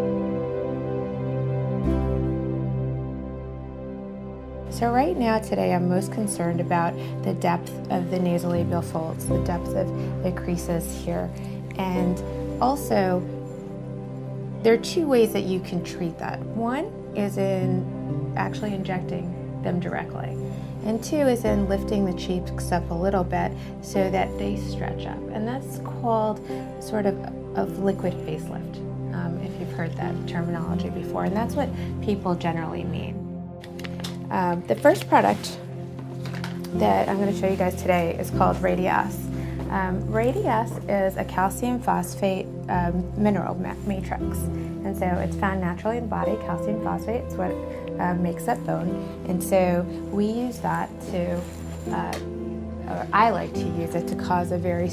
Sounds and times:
Music: 0:00.0 - 0:54.9
Speech: 0:04.7 - 0:13.3, 0:14.6 - 0:33.2, 0:34.3 - 0:35.6, 0:36.8 - 0:54.9.

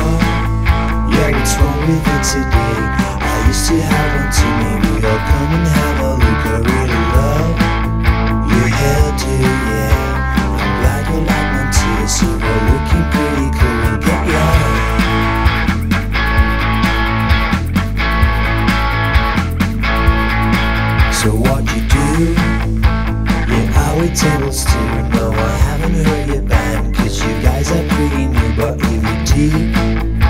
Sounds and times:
Strum: 0:00.0 - 0:26.9
Bass guitar: 0:00.0 - 0:30.3
Drum: 0:00.0 - 0:30.3
Electric guitar: 0:00.0 - 0:30.3.

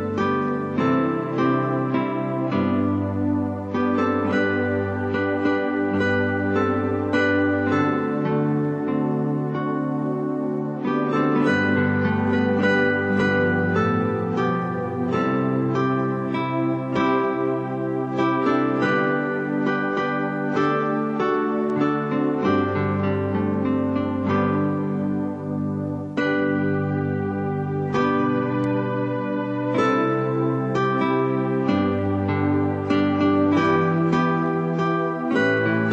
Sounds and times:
Music: 0:00.0 - 0:35.9.

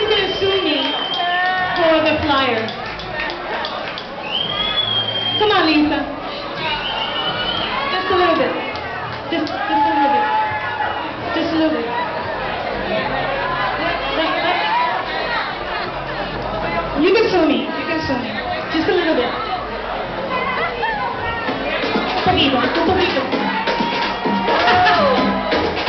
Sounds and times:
Music: 0:19.6 - 0:25.8.

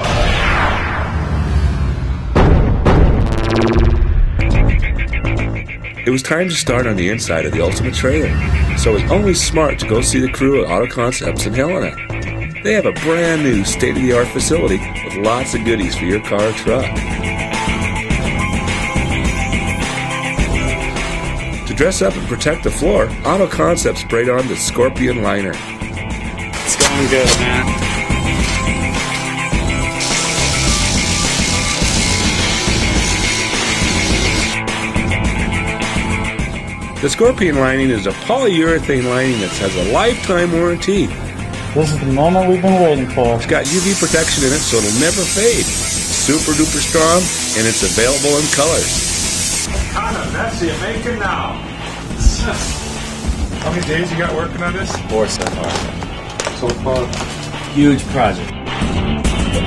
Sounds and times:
Music: 0:00.0 - 0:59.6.

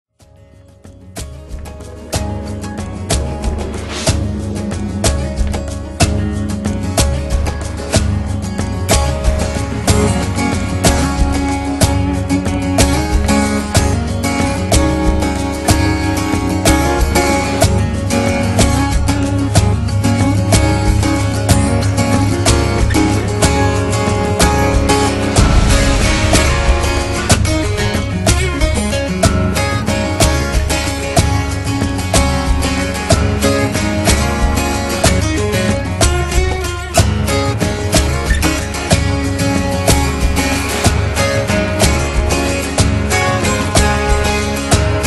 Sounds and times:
Acoustic guitar: 0:00.2 - 0:45.0
Strum: 0:00.5 - 0:45.0.

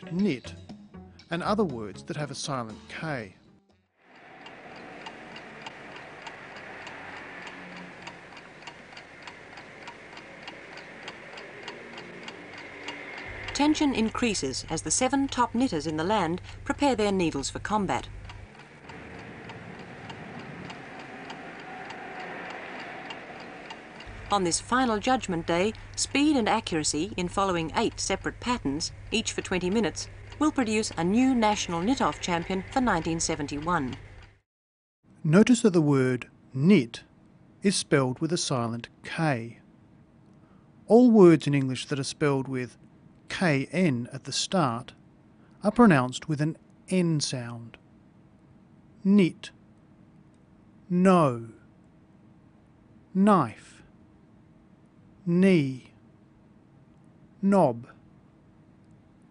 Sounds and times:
Speech: 0:00.0 - 0:00.6, 0:01.3 - 0:03.4, 0:13.6 - 0:18.1, 0:24.3 - 0:34.0, 0:35.2 - 0:37.1, 0:37.7 - 0:39.6, 0:40.9 - 0:44.9, 0:45.6 - 0:47.8, 0:49.0 - 0:49.5, 0:50.9 - 0:51.6, 0:53.2 - 0:53.8, 0:55.3 - 0:55.9, 0:57.4 - 0:57.9.

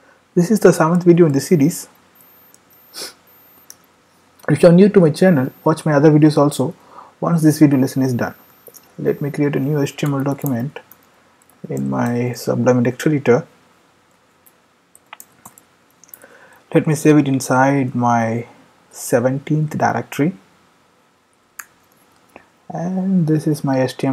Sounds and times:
Speech: 0:00.4 - 0:01.9, 0:04.4 - 0:08.4, 0:09.0 - 0:10.8, 0:11.6 - 0:13.5, 0:16.7 - 0:20.4, 0:22.7 - 0:24.1.

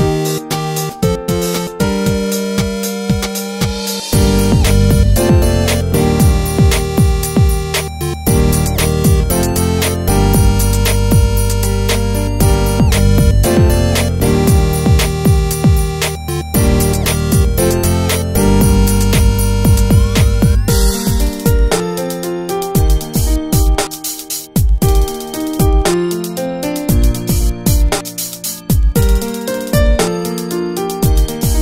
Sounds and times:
Music: 0:00.0 - 0:31.6.

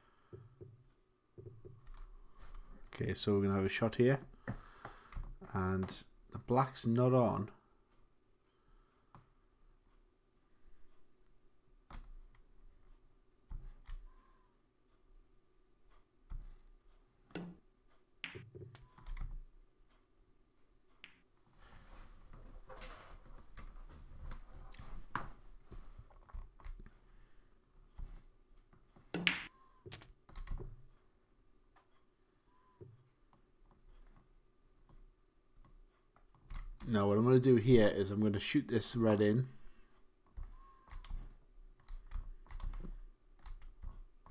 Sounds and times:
Speech: 0:02.9 - 0:04.3, 0:05.5 - 0:07.6, 0:36.8 - 0:39.6.

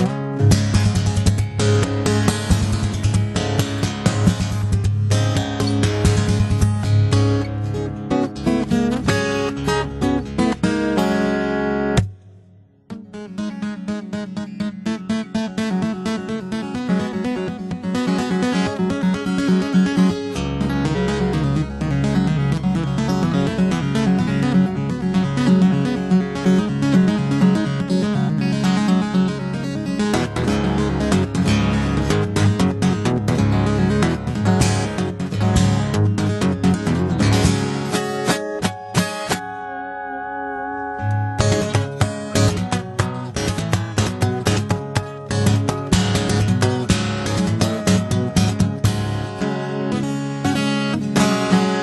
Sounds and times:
Acoustic guitar: 0:00.0 - 0:51.8
Echo: 0:38.4 - 0:43.3.

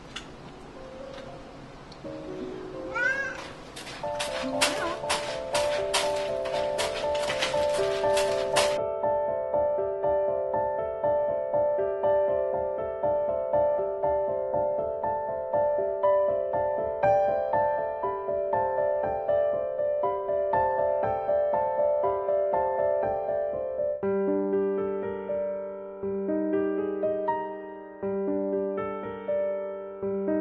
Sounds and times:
Music: 0:00.7 - 0:30.4.

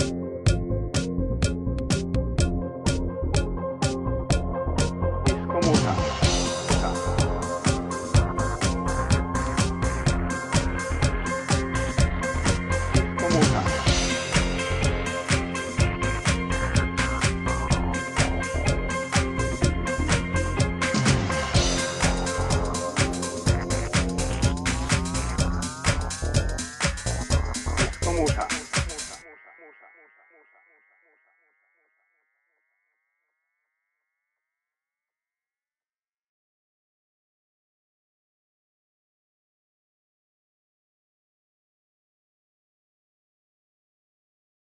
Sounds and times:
Disco: 0:00.0 - 0:30.2.

